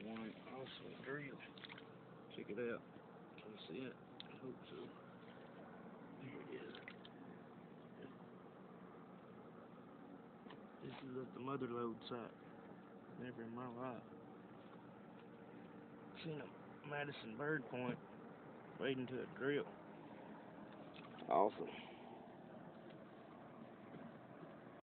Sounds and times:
Speech: 0.0 - 1.5, 2.3 - 5.0, 6.2 - 6.8, 10.8 - 12.3, 13.2 - 14.1, 16.2 - 18.0, 18.8 - 19.7, 21.3 - 21.9.

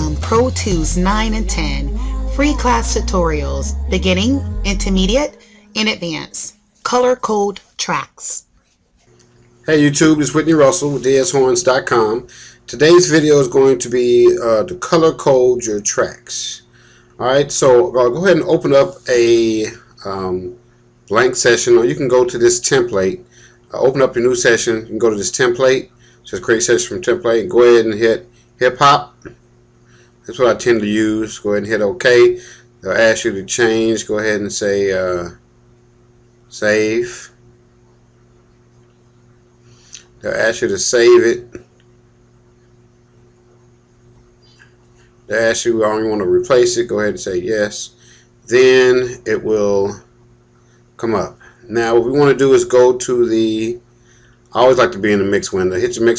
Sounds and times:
Speech: 0.0 - 8.5, 9.7 - 29.4, 30.3 - 35.4, 36.5 - 37.4, 40.2 - 41.7, 45.3 - 50.1, 51.0 - 53.8, 54.5 - 56.1.

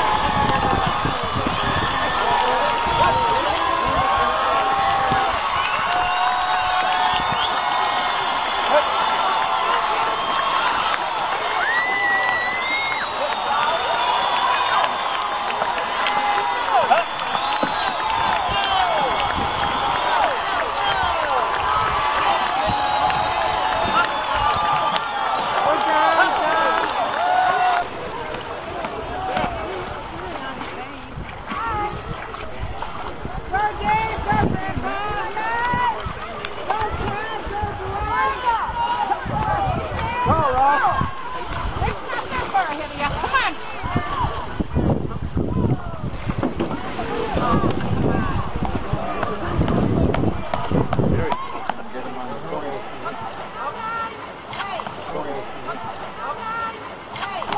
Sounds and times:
Rowboat, canoe, kayak: 0.0 - 57.5
Wind: 0.0 - 57.5.

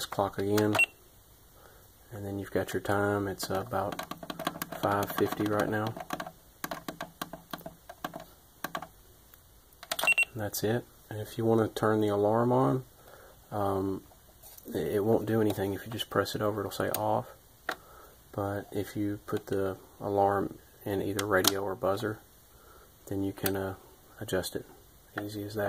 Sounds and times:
Speech: 0.0 - 0.8, 2.1 - 4.0, 4.8 - 6.0, 10.3 - 12.9, 13.5 - 17.4, 18.3 - 22.3, 23.1 - 25.6.

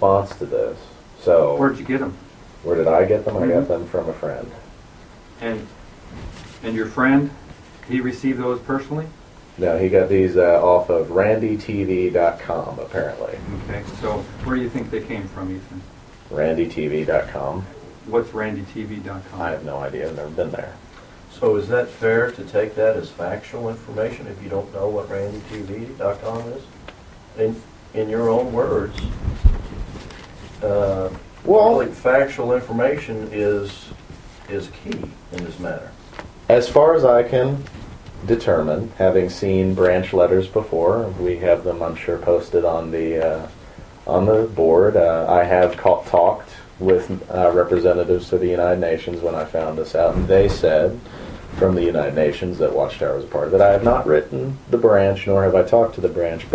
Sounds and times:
Speech: 0.0 - 4.7, 5.4 - 5.8, 6.6 - 29.2, 30.6 - 56.5.

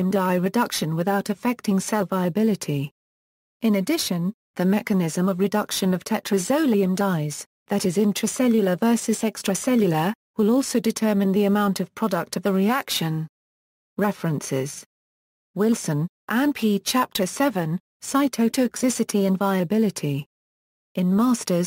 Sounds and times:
Speech synthesizer: 0.0 - 2.9, 3.6 - 13.3, 14.0 - 14.9, 15.6 - 20.3, 21.0 - 21.6.

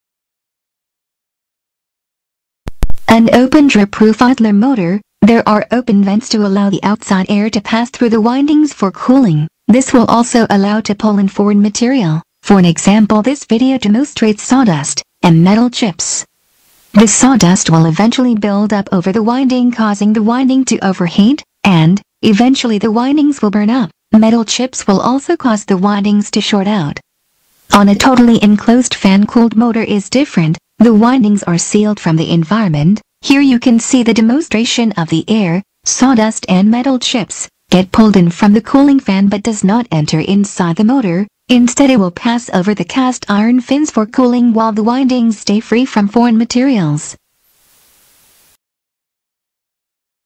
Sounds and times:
Speech: 3.1 - 16.3, 17.0 - 27.0, 27.7 - 47.2.

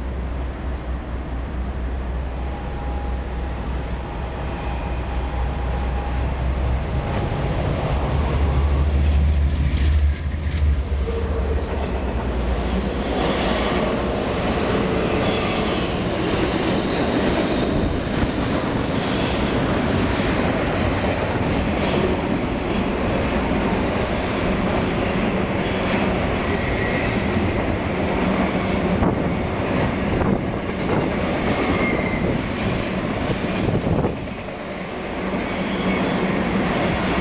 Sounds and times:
Outside, rural or natural: 0.0 - 37.2
Train: 0.0 - 37.2.

